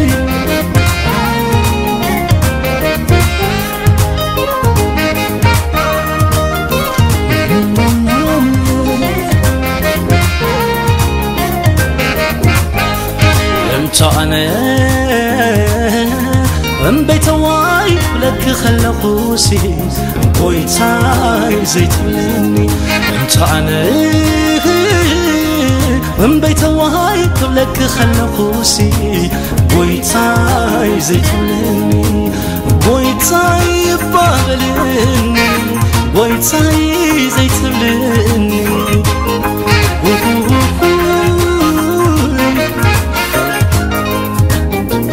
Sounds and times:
Happy music: 0.0s - 45.1s.

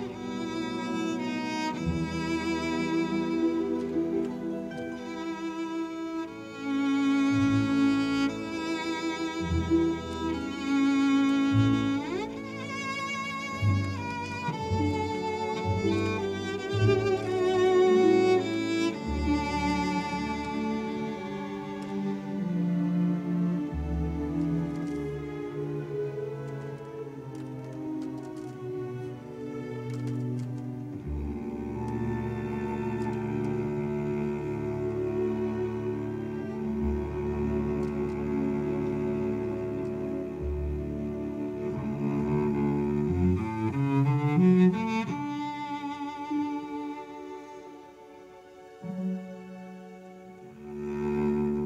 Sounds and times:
Double bass: 0.0s - 47.3s, 48.8s - 51.6s
Cello: 0.0s - 51.6s.

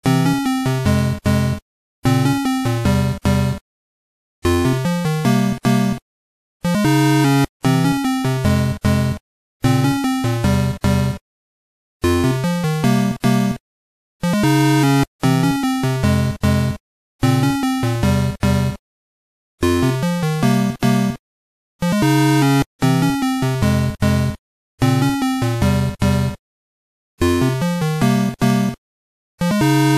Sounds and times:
Music: 0.0s - 3.6s, 4.4s - 6.0s, 6.6s - 11.2s, 12.0s - 13.6s, 14.2s - 18.8s, 19.6s - 21.2s, 21.8s - 26.4s, 27.2s - 28.8s, 29.4s - 29.9s.

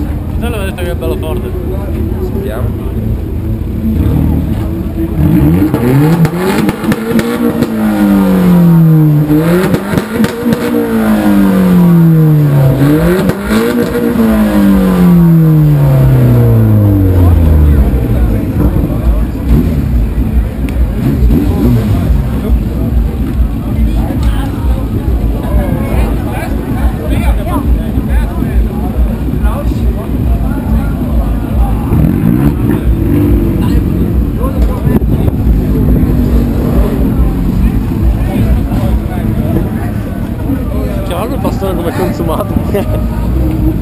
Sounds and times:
Speech: 0.0s - 3.3s, 17.2s - 43.8s
Outside, urban or manmade: 0.0s - 43.8s.

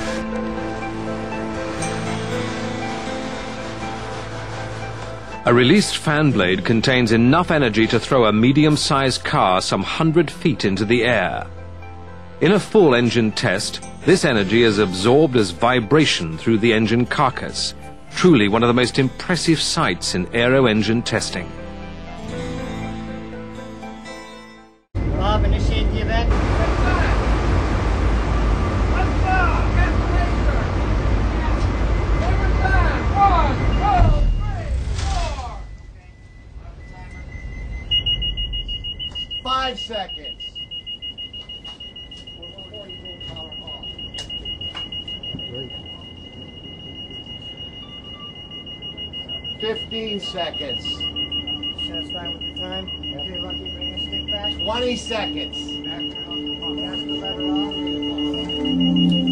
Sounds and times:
Music: 0.0s - 25.0s, 40.6s - 59.3s
Speech: 5.5s - 11.5s, 12.4s - 21.5s, 25.1s - 27.2s, 28.9s - 30.8s, 31.4s - 37.2s, 39.5s - 40.5s, 42.4s - 43.9s, 49.6s - 58.8s.

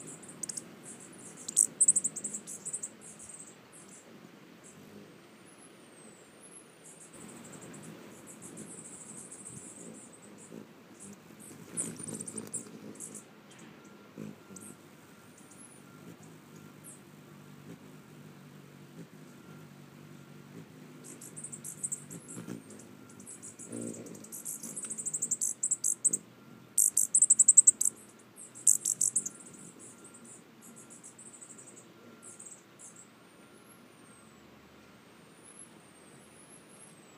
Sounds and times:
Bird: 0.0s - 17.1s, 19.0s - 34.5s
Outside, rural or natural: 0.0s - 37.1s.

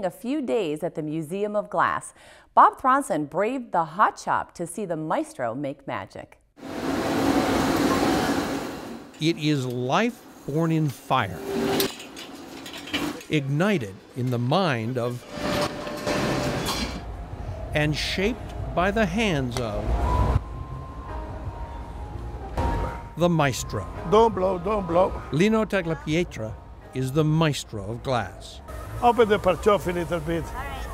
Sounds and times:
Music: 17.0s - 30.9s.

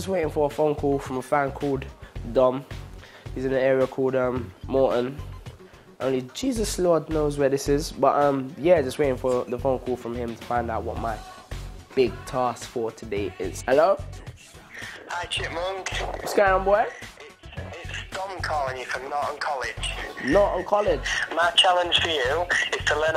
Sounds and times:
Speech: 0.0s - 2.6s, 3.4s - 5.2s, 6.0s - 11.2s, 12.0s - 14.0s, 15.1s - 23.1s
Music: 0.0s - 23.1s.

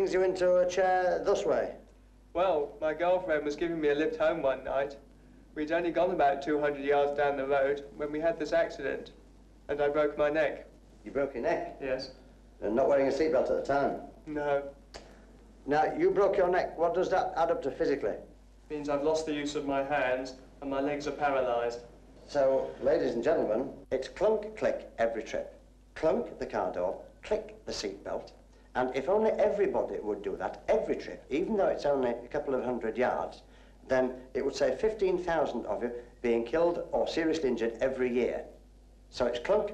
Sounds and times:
Speech: 0.0s - 5.0s, 5.6s - 14.8s, 15.7s - 39.7s.

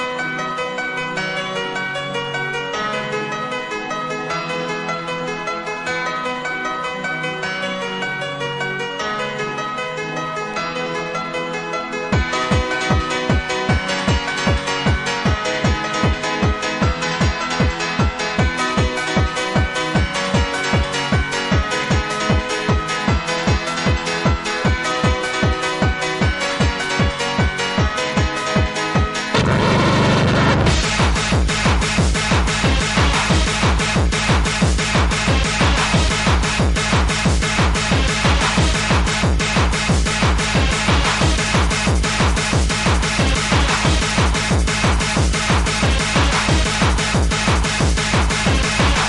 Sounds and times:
Techno: 12.2s - 49.0s.

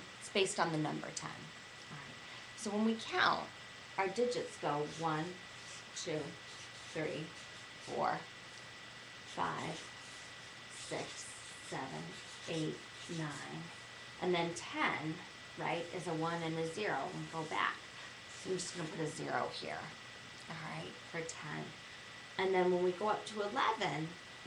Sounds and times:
Speech: 0.2s - 5.4s, 6.0s - 8.3s, 9.4s - 9.9s, 10.8s - 17.8s, 18.4s - 21.8s, 22.4s - 24.2s
Writing: 4.6s - 8.2s, 9.3s - 13.8s, 18.3s - 19.1s.

